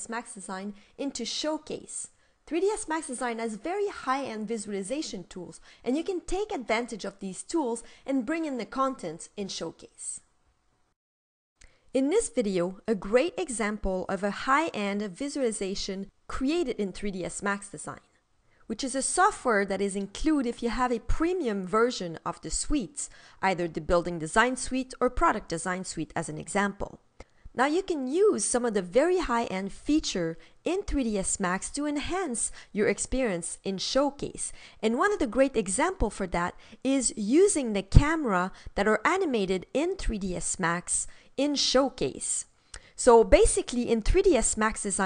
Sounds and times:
Speech: 0:00.0 - 0:10.3, 0:12.0 - 0:18.1, 0:18.7 - 0:27.0, 0:27.6 - 0:45.0.

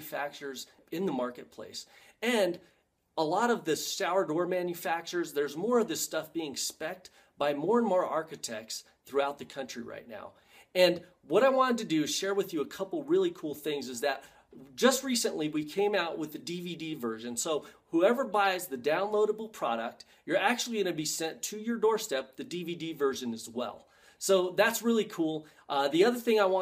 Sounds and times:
Speech: 0:00.0 - 0:02.6, 0:03.2 - 0:26.6.

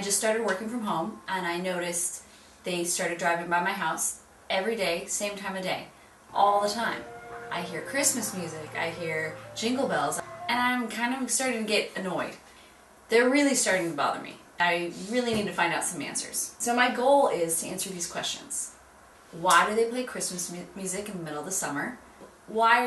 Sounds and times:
Speech: 0:00.0 - 0:12.4, 0:13.1 - 0:22.8.

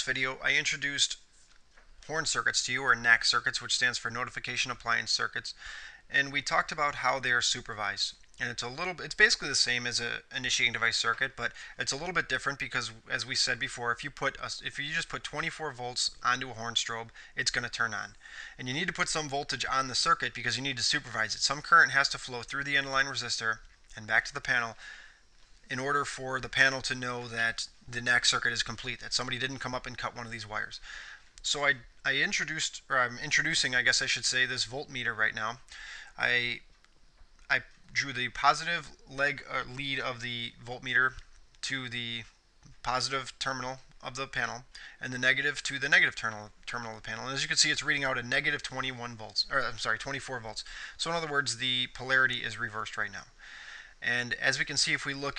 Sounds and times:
Speech: 0:00.0 - 0:01.2, 0:02.0 - 0:24.8, 0:25.7 - 0:30.8, 0:31.4 - 0:36.7, 0:37.5 - 0:53.3, 0:54.0 - 0:55.3.

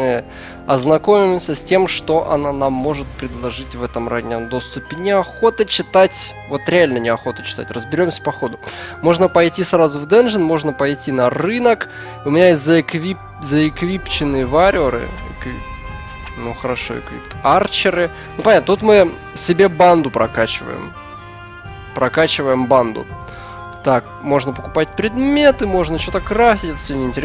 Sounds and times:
Speech: 0:00.0 - 0:20.9, 0:22.0 - 0:23.1, 0:23.8 - 0:27.2
Music: 0:00.0 - 0:27.2.

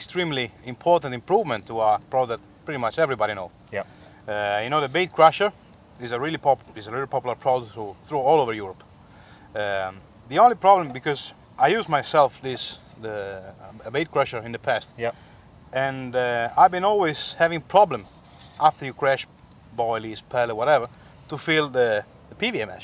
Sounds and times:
Speech: 0:00.0 - 0:08.8, 0:09.6 - 0:15.1, 0:15.7 - 0:22.8.

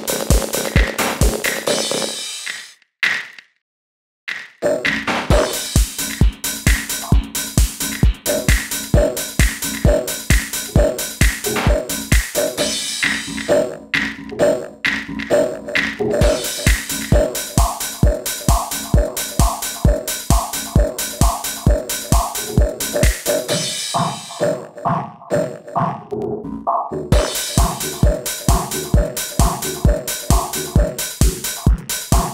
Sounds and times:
Drum machine: 0:00.0 - 0:03.4, 0:04.3 - 0:25.9, 0:27.2 - 0:32.3.

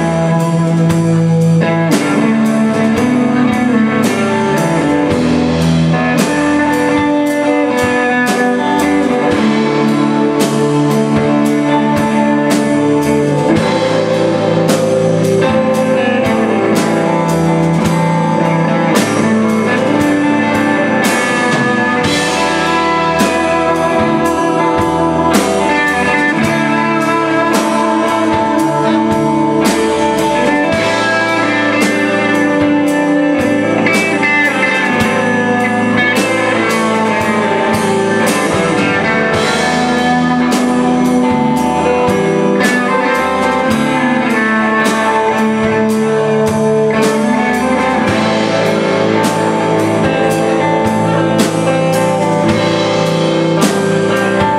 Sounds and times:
Music: 0:00.0 - 0:54.5.

